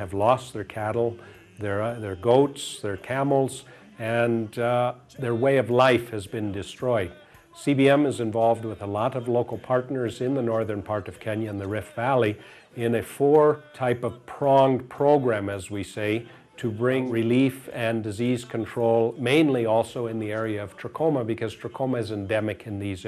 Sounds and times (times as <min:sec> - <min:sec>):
Music: 0:00.0 - 0:23.0
Speech: 0:00.0 - 0:23.0.